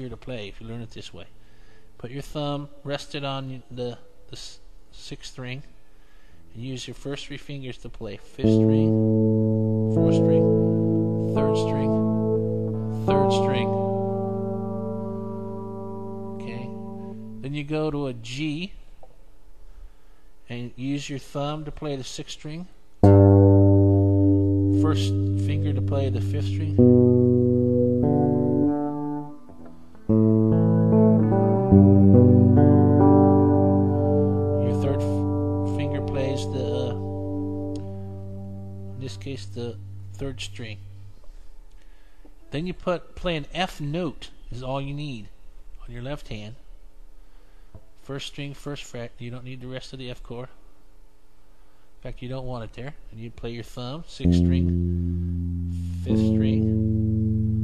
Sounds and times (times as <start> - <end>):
Speech: 0.0 - 1.4, 2.0 - 5.7, 6.5 - 9.0, 10.0 - 10.5, 11.3 - 12.0, 13.0 - 13.8, 16.4 - 16.8, 17.4 - 18.8, 20.5 - 22.8, 24.8 - 26.8, 34.6 - 37.1, 39.0 - 40.8, 42.5 - 46.7, 48.0 - 50.6, 52.0 - 54.7, 55.9 - 56.8
Inside, small room: 0.0 - 57.6
Electronic tuner: 8.4 - 17.5, 23.0 - 41.4, 54.2 - 57.6
Guitar: 8.4 - 17.6, 23.0 - 41.3, 54.2 - 57.6.